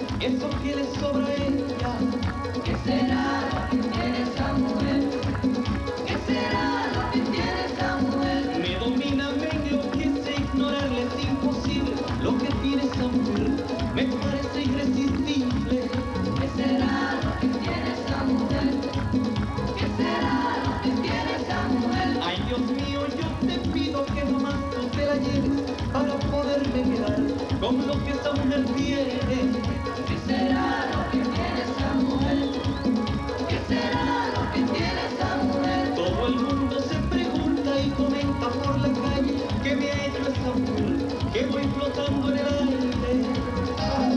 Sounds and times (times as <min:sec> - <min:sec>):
Middle Eastern music: 0:00.0 - 0:44.1.